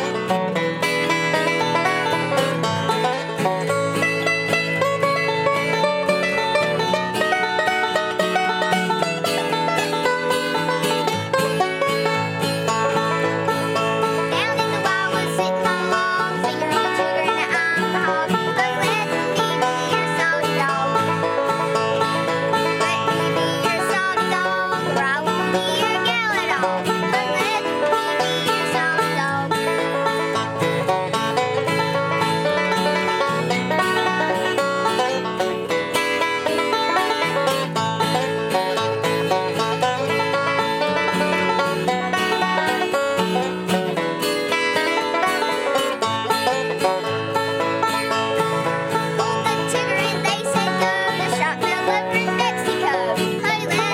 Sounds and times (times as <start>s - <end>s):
Banjo: 0.0s - 53.9s.